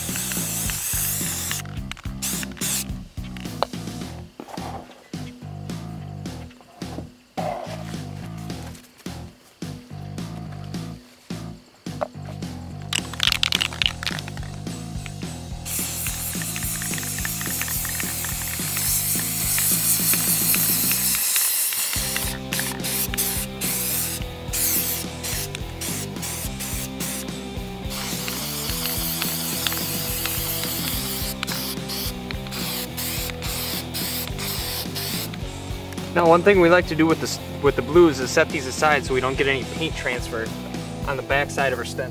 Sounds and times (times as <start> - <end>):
Music: 0.0 - 42.1.